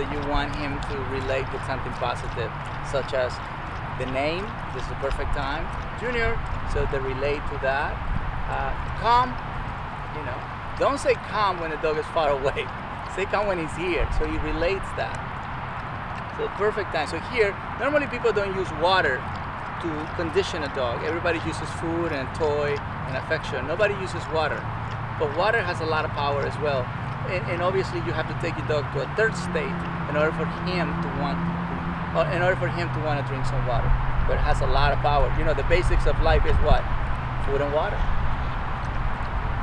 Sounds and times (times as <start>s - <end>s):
Speech: 0.0s - 3.4s, 4.0s - 9.4s, 10.2s - 15.2s, 16.4s - 19.2s, 19.8s - 24.6s, 25.2s - 31.4s, 32.2s - 38.1s.